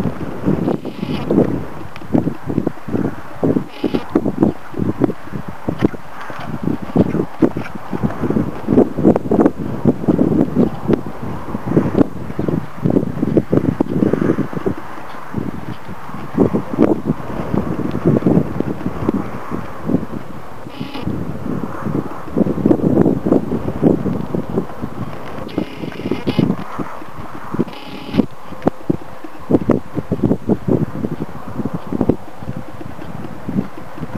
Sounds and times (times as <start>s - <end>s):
Clip-clop: 0.0s - 34.1s.